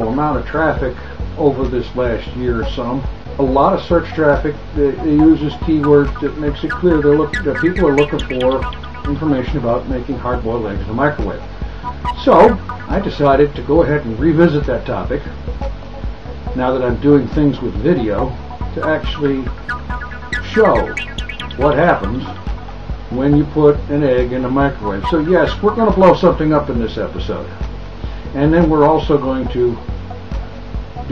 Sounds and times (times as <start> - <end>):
Speech: 0.0 - 11.4, 12.2 - 15.3, 16.6 - 19.6, 20.4 - 21.0, 21.6 - 22.4, 23.1 - 27.6, 28.4 - 29.8
Music: 0.0 - 31.1.